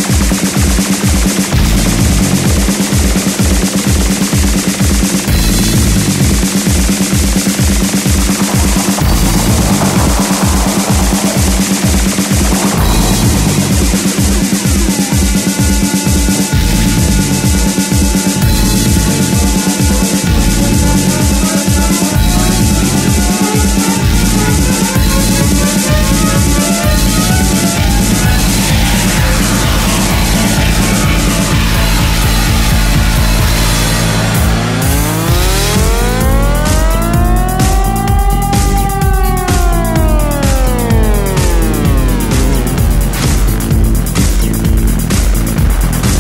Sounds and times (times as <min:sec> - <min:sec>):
Progressive rock: 0:00.0 - 0:46.2
Techno: 0:00.0 - 0:46.2
Trance music: 0:00.0 - 0:46.2.